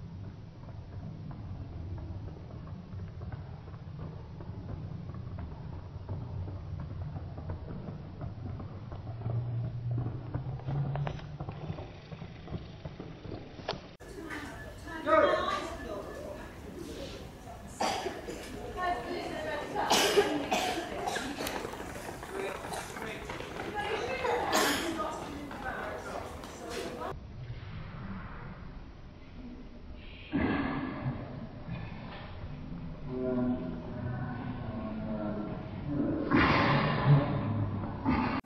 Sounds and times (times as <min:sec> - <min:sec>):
Run: 0:00.0 - 0:27.2
Speech: 0:14.0 - 0:27.2.